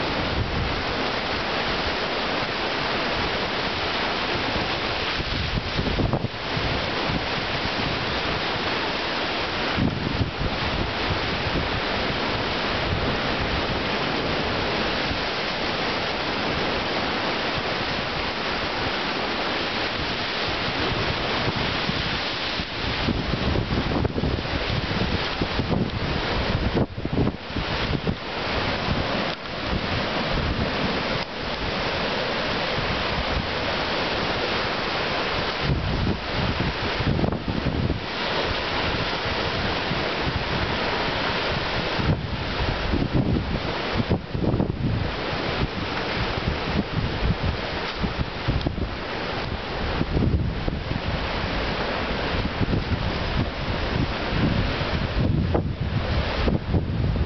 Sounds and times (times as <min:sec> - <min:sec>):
Waves, surf: 0:00.0 - 0:57.2
Wind noise (microphone): 0:00.0 - 0:57.2.